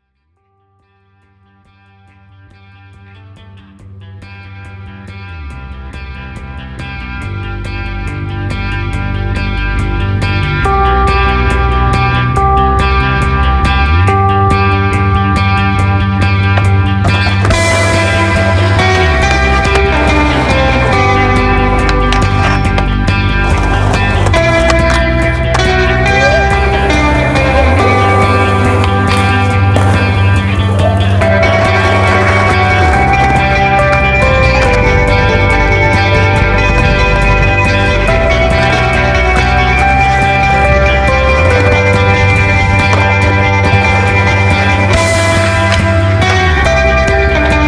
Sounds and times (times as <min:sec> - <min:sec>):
Music: 0:00.0 - 0:47.6
Skateboard: 0:16.3 - 0:47.6.